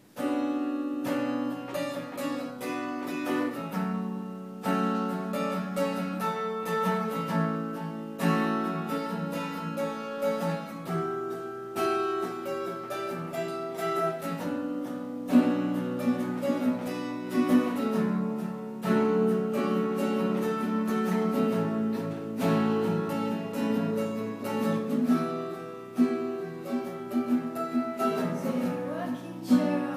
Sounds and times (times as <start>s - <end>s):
Guitar: 0.0s - 29.9s
String section: 12.0s - 29.9s
Singing: 27.7s - 29.9s.